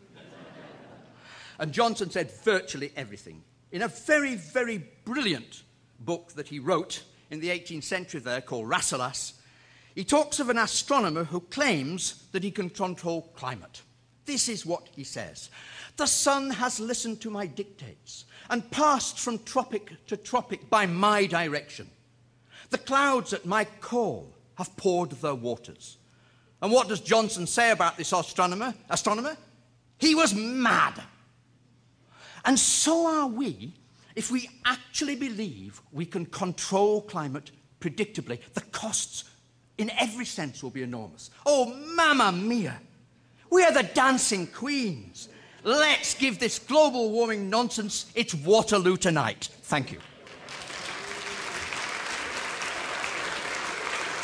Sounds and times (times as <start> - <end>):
Speech: 1.6 - 9.4, 10.0 - 22.0, 22.7 - 26.0, 26.6 - 31.2, 32.4 - 42.9, 43.5 - 50.1
Applause: 49.9 - 54.2.